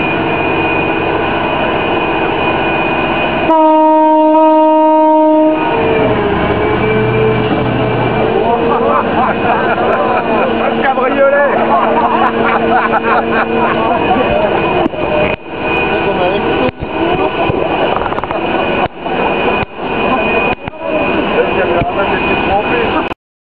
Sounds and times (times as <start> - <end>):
Speech: 10.6 - 12.0, 13.8 - 19.2, 20.0 - 23.1.